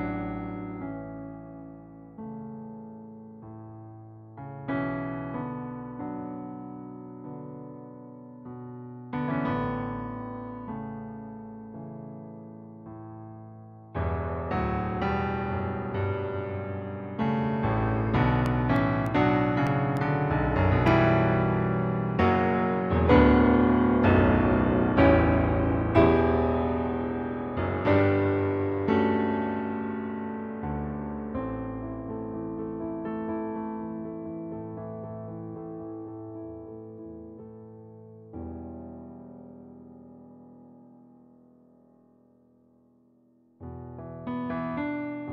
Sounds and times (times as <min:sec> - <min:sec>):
Electric piano: 0:00.0 - 0:45.3.